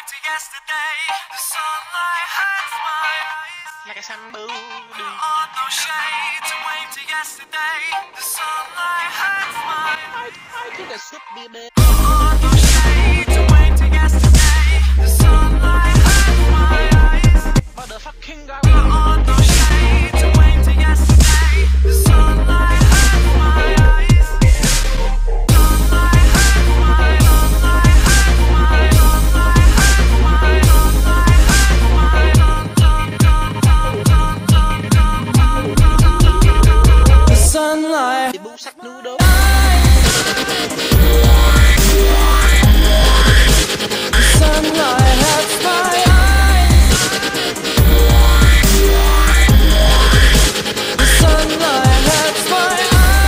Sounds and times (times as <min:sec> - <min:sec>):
Dubstep: 0:08.4 - 0:53.2.